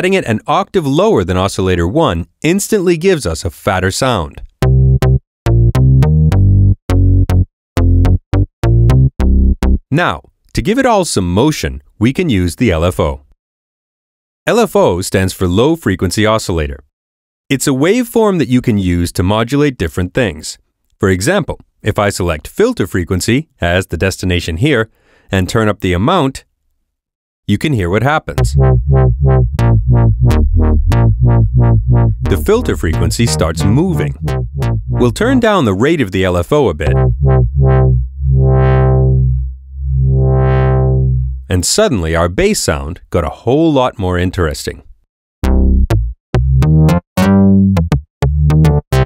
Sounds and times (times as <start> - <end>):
Speech: 0.0 - 4.5, 9.9 - 13.3, 14.5 - 16.9, 17.5 - 26.5, 27.5 - 28.5, 32.3 - 34.2, 35.0 - 37.0, 41.5 - 44.9
Synthesizer: 32.2 - 35.6, 36.9 - 39.4, 40.0 - 41.3.